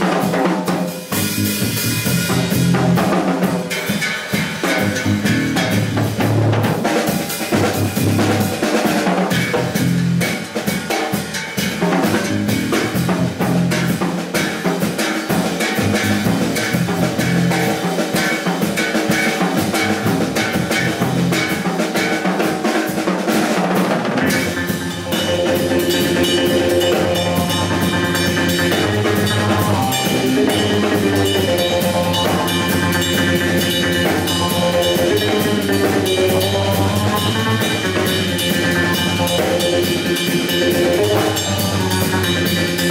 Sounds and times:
Steelpan: 0:24.2 - 0:42.9.

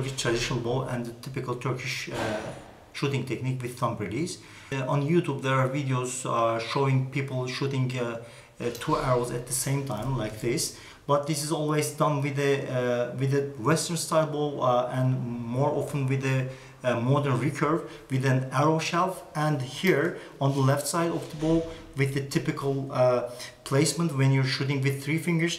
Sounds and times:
Speech: 0:00.0 - 0:25.5.

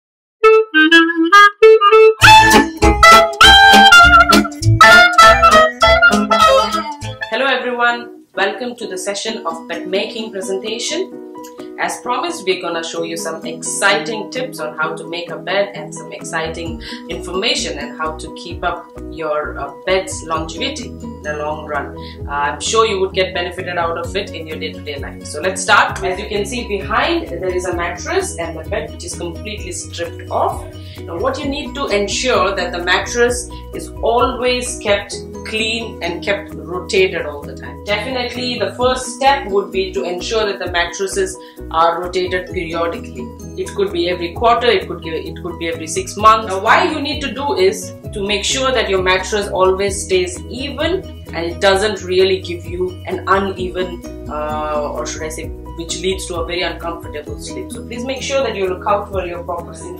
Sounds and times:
Saxophone: 0:00.4 - 0:07.4
Speech: 0:06.6 - 0:11.1, 0:11.8 - 0:59.9.

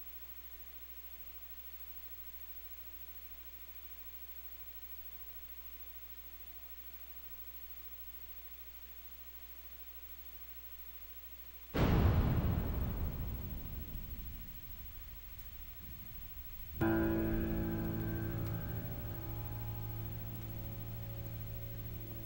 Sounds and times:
Music: 0:15.7 - 0:22.2.

